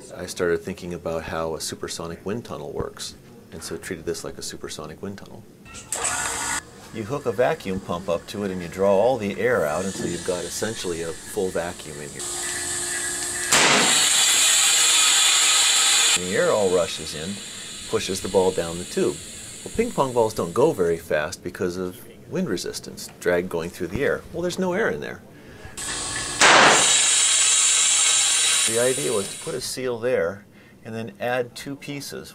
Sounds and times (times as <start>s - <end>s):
Speech: 0.0s - 5.5s, 6.9s - 12.2s, 16.2s - 25.2s, 28.7s - 32.3s.